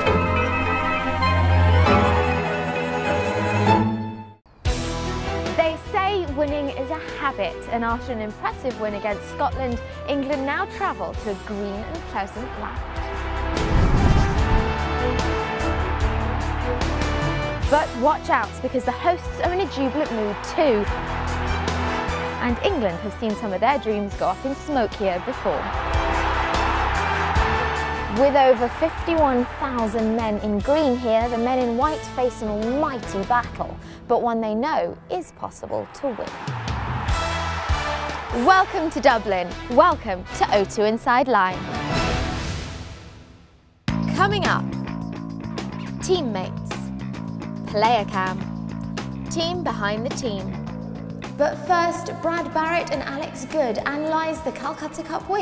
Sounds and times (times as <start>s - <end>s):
Music: 0.0s - 55.4s
Speech: 5.5s - 12.8s, 17.7s - 20.9s, 22.4s - 25.6s, 28.1s - 36.3s, 38.4s - 41.6s, 44.1s - 44.7s, 46.0s - 46.9s, 47.7s - 48.4s, 49.3s - 50.5s, 51.4s - 55.4s.